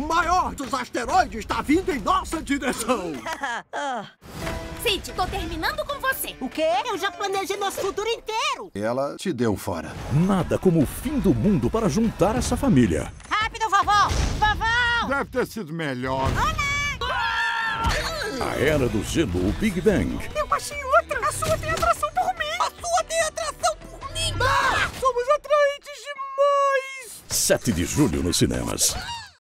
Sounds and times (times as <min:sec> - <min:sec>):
Music: 0:04.3 - 0:08.7, 0:10.0 - 0:14.1, 0:18.0 - 0:26.6.